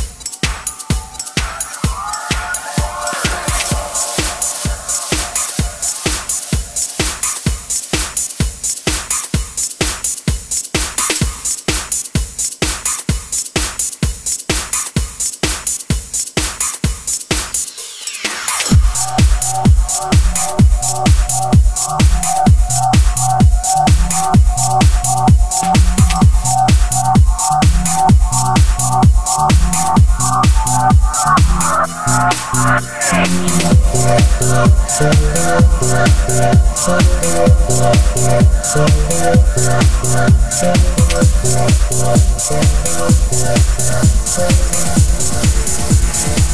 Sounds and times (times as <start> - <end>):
Music: 0.0 - 46.5.